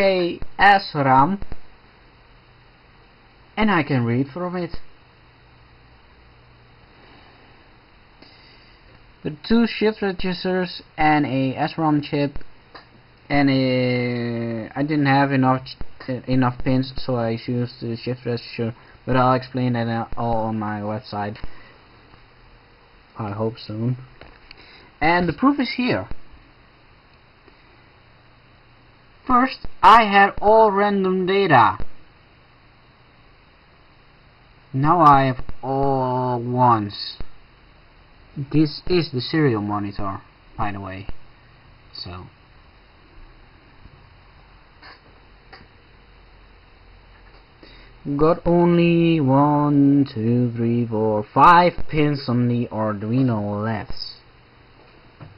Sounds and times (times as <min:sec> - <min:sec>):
Speech: 0:00.0 - 0:01.5, 0:03.6 - 0:04.9, 0:09.2 - 0:12.4, 0:13.3 - 0:21.5, 0:23.2 - 0:24.1, 0:25.0 - 0:26.2, 0:29.2 - 0:31.9, 0:34.7 - 0:37.3, 0:38.4 - 0:41.2, 0:41.9 - 0:42.4, 0:48.0 - 0:54.3.